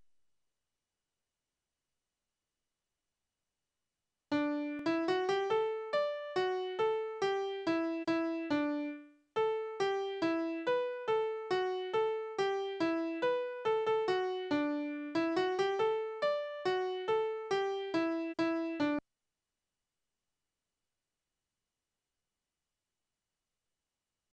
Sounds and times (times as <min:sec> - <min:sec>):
Music: 0:04.3 - 0:19.0.